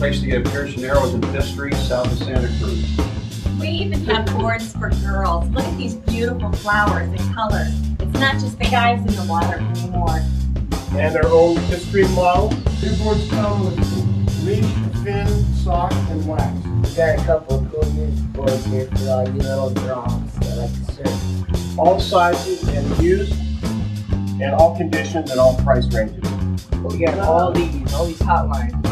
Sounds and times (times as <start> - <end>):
Speech: 0.0 - 3.0, 3.6 - 10.2, 10.9 - 21.2, 21.8 - 23.5, 24.4 - 28.8
Music: 0.0 - 28.9.